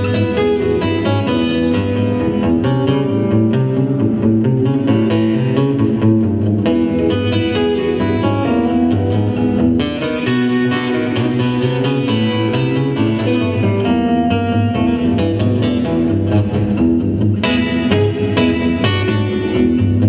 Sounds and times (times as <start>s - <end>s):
Music: 0.0s - 20.0s.